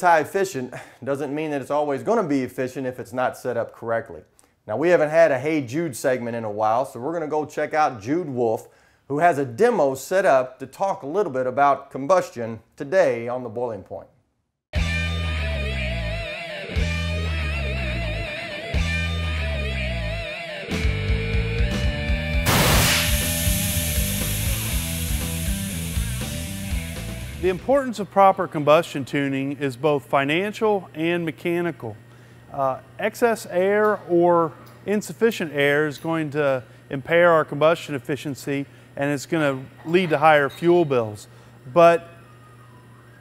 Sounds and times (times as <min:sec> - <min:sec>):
Speech: 0:00.0 - 0:14.2, 0:27.4 - 0:42.1
Music: 0:14.8 - 0:27.7.